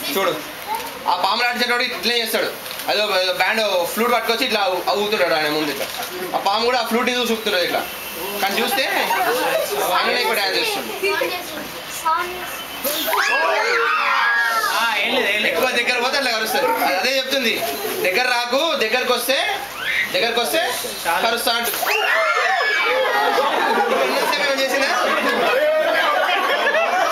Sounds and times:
Inside, large room or hall: 0.0 - 11.4, 12.0 - 27.1.

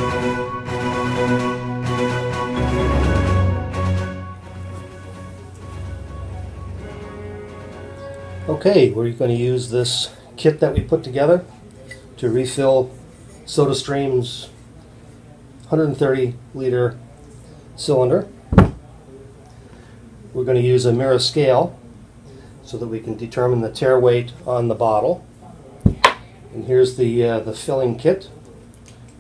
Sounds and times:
Speech: 8.5 - 28.8.

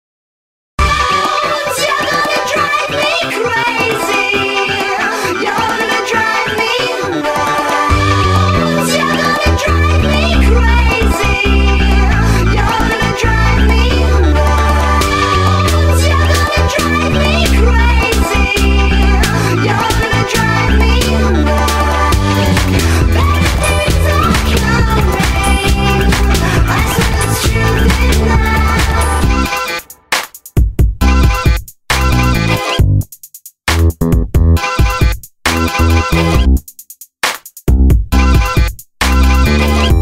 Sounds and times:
Music: 0.8 - 40.0.

